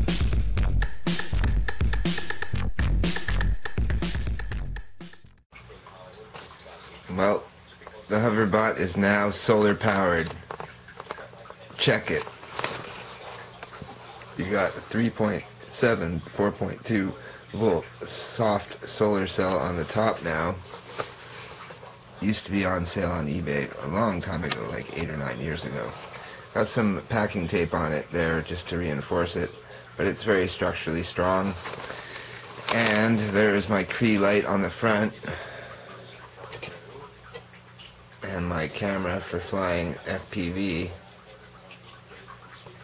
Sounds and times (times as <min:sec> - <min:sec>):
Speech: 0:05.7 - 0:10.4, 0:11.7 - 0:12.3, 0:14.4 - 0:20.7, 0:22.2 - 0:31.7, 0:32.7 - 0:35.5, 0:38.2 - 0:41.1.